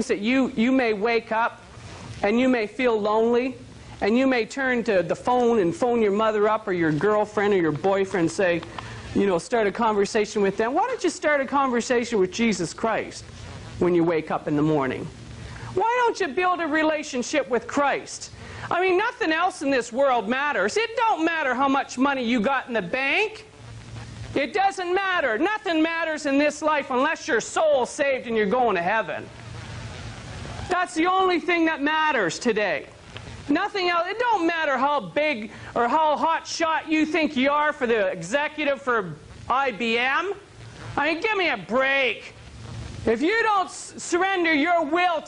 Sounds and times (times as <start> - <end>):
Speech: 0.0 - 1.6, 2.2 - 13.2, 13.8 - 15.1, 15.8 - 23.5, 24.4 - 29.3, 30.7 - 32.9, 33.5 - 40.4, 41.0 - 42.4, 43.1 - 45.2.